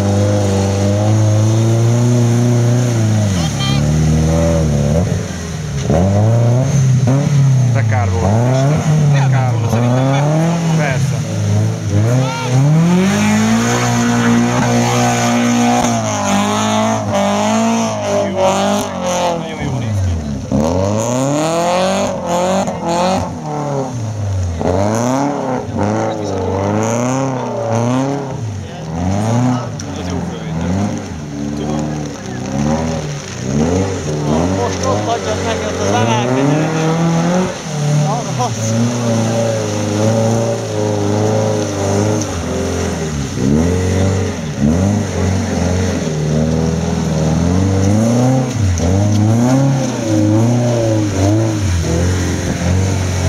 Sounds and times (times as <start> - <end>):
Speech: 7.8 - 11.3, 18.0 - 20.4, 25.6 - 32.7, 34.2 - 37.1, 38.0 - 39.6.